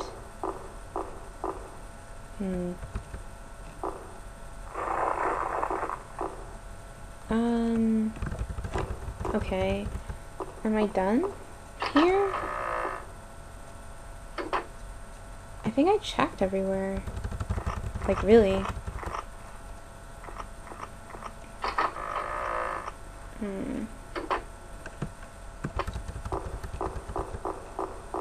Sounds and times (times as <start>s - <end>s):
Speech: 2.4s - 2.8s, 7.3s - 8.2s, 9.3s - 9.9s, 10.6s - 12.4s, 15.7s - 17.1s, 18.1s - 18.7s, 23.4s - 24.0s.